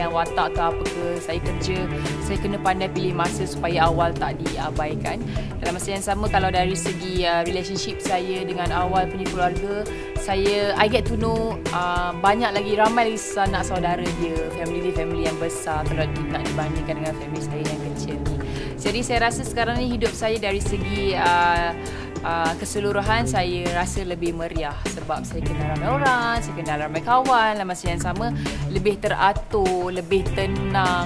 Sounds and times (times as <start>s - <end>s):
Speech: 0.0s - 18.2s, 18.8s - 31.0s
Music: 0.0s - 31.0s.